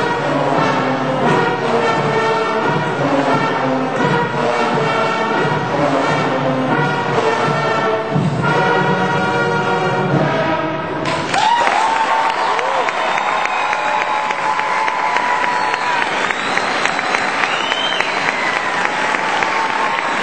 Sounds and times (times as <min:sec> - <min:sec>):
Classical music: 0:00.0 - 0:11.1
Orchestra: 0:00.0 - 0:20.2
Applause: 0:11.0 - 0:20.2.